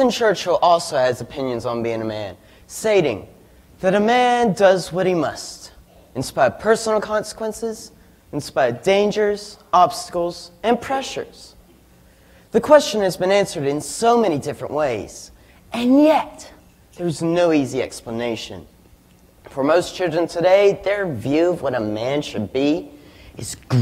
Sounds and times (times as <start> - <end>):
Male speech, man speaking: 0.0 - 11.6, 12.5 - 18.7, 19.5 - 23.8
Narration, monologue: 0.0 - 23.8.